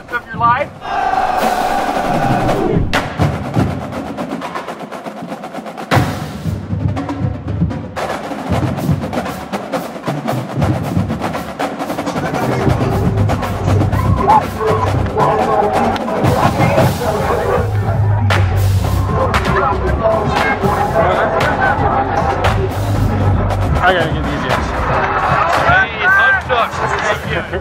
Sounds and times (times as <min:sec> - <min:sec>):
Speech: 0:00.0 - 0:00.7, 0:14.3 - 0:18.5, 0:19.1 - 0:22.8, 0:23.7 - 0:27.6
Music: 0:00.2 - 0:27.6.